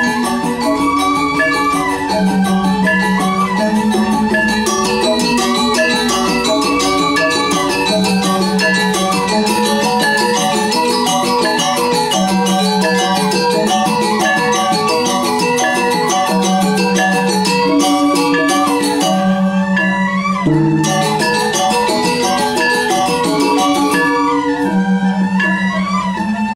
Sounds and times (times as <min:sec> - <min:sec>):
Traditional music: 0:00.0 - 0:26.5.